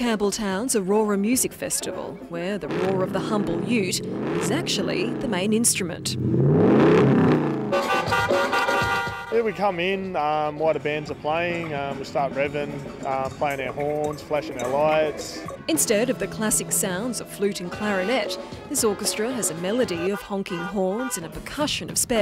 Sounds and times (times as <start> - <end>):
Music: 0.0 - 6.2, 7.8 - 22.2
Speech: 0.0 - 6.2, 9.4 - 22.2.